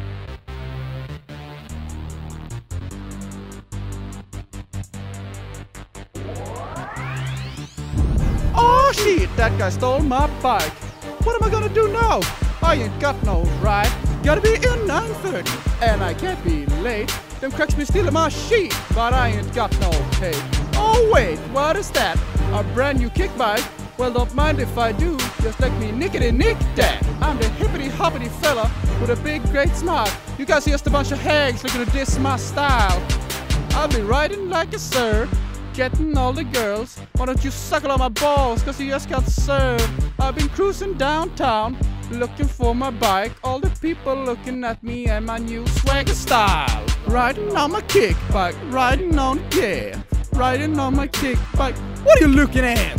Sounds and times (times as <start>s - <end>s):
Background music: 0.0s - 52.9s.